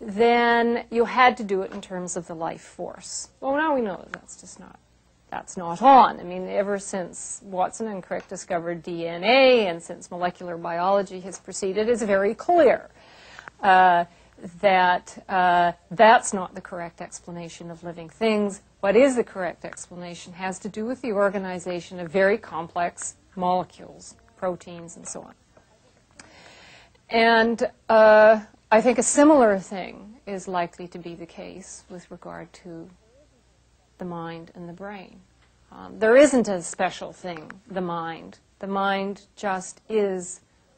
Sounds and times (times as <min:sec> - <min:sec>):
Speech: 0:00.0 - 0:12.9, 0:13.6 - 0:26.0, 0:27.1 - 0:33.0, 0:34.0 - 0:40.4.